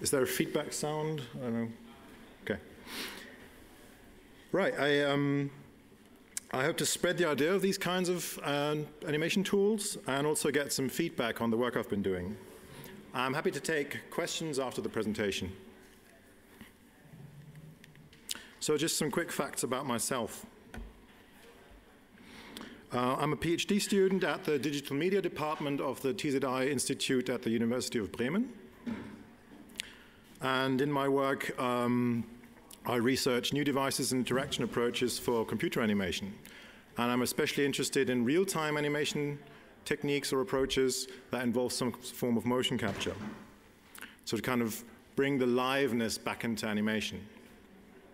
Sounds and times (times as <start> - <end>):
Speech: 0.0 - 2.7, 4.5 - 5.6, 6.4 - 12.4, 13.1 - 15.6, 18.6 - 20.5, 22.9 - 28.6, 30.4 - 36.4, 37.0 - 43.4, 44.3 - 47.4.